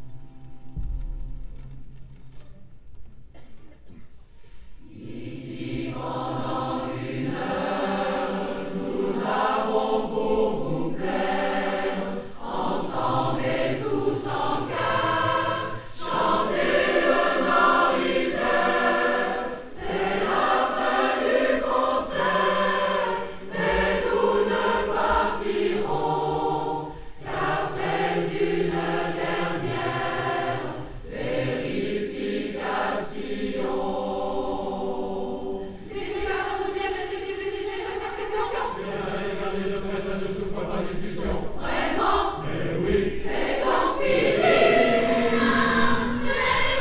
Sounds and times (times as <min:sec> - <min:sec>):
Mantra: 0:04.8 - 0:46.8.